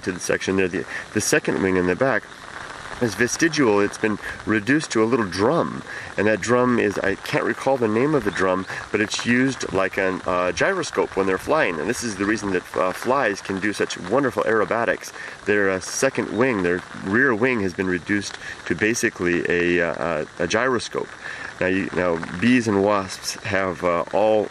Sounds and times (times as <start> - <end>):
Speech: 0.0 - 2.2, 3.0 - 24.5.